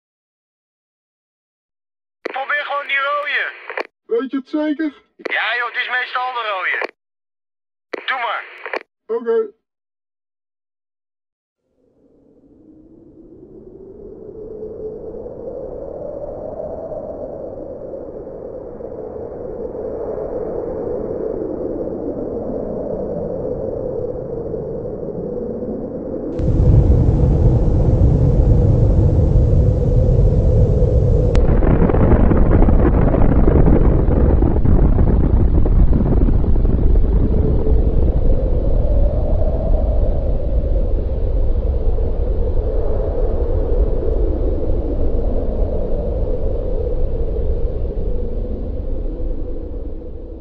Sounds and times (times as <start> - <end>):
Speech: 2.3 - 7.0, 8.0 - 9.6.